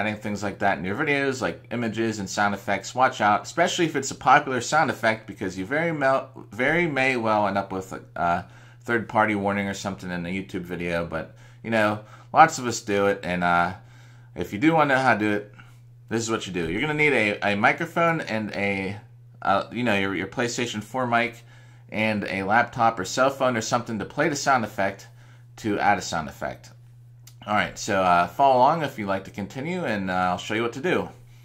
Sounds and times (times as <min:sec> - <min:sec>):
Speech: 0:00.0 - 0:13.8, 0:14.4 - 0:31.2.